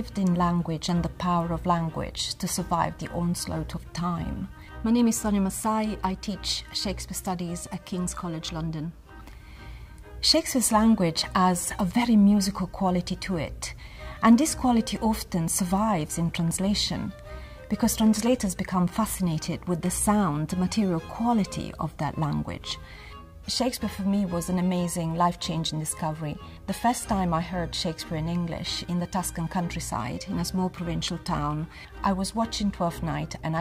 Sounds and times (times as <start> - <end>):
Speech: 0.0 - 9.0, 10.2 - 22.8, 23.5 - 33.6
Music: 0.0 - 33.6.